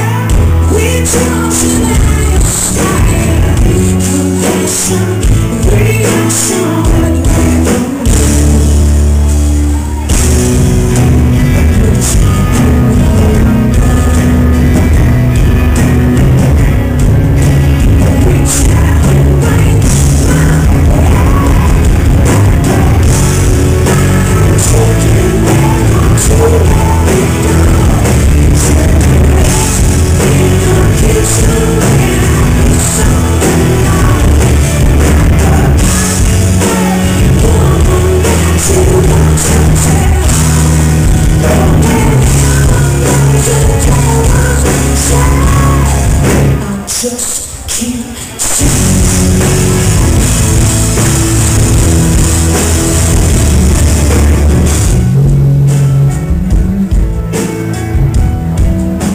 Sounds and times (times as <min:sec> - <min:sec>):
Music: 0:00.0 - 0:59.1.